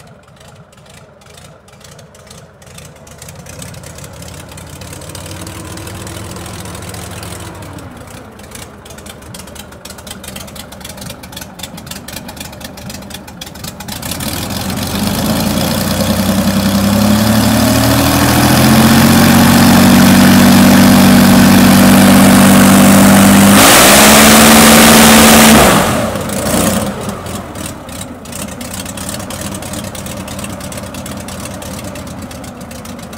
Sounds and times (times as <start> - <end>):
Heavy engine (low frequency): 0.0 - 33.1
Vehicle: 0.0 - 33.1.